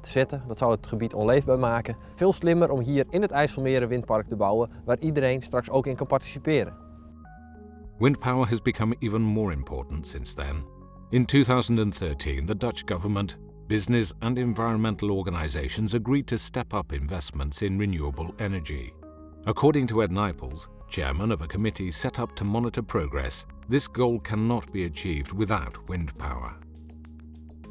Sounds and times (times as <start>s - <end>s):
Speech: 0.0s - 6.8s, 8.0s - 26.6s
Music: 0.0s - 27.7s.